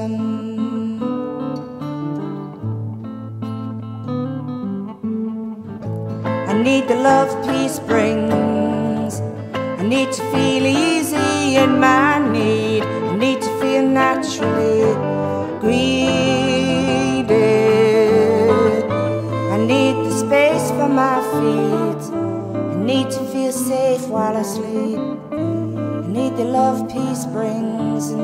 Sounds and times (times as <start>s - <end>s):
Music: 0.0s - 28.2s.